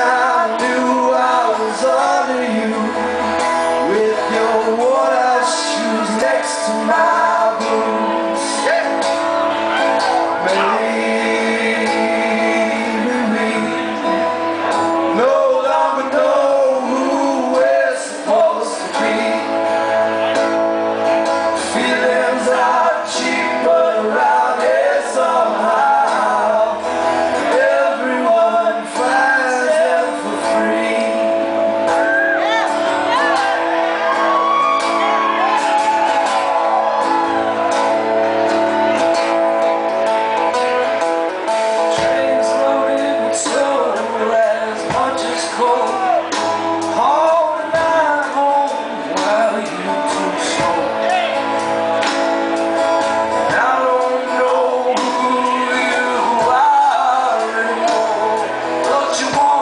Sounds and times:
Male singing: 0.0s - 3.2s, 3.8s - 9.2s, 10.4s - 14.2s, 15.1s - 19.6s, 21.6s - 31.6s, 41.9s - 51.4s, 53.4s - 59.6s
Music: 0.0s - 59.6s.

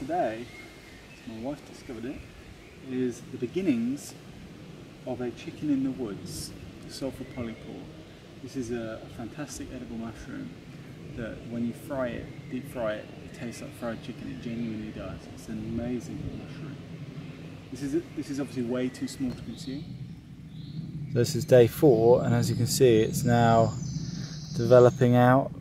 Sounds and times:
Speech: 0.0s - 0.5s, 1.2s - 2.2s, 2.8s - 4.2s, 5.1s - 7.9s, 8.5s - 10.5s, 11.2s - 16.8s, 17.8s - 19.9s, 21.2s - 23.8s, 24.6s - 25.5s.

